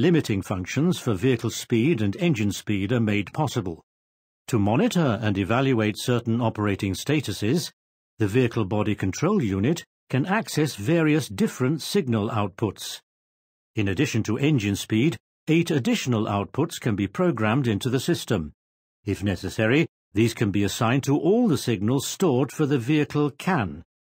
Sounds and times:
Speech: 0:00.0 - 0:03.8, 0:04.5 - 0:13.1, 0:13.8 - 0:23.9.

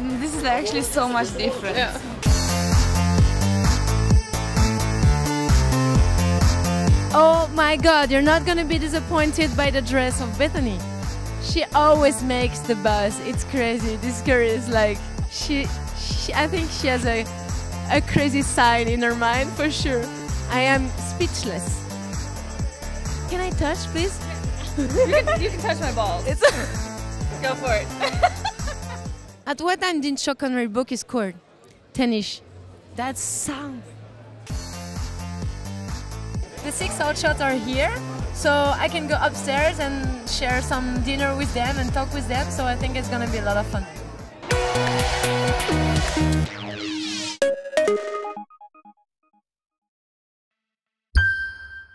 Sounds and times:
Music: 0:00.0 - 0:29.5, 0:34.3 - 0:48.8.

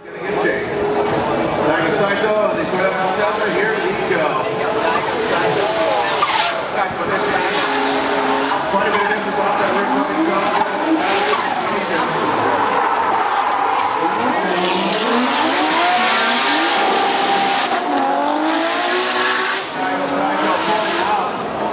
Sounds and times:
Race car, auto racing: 0:00.0 - 0:21.7.

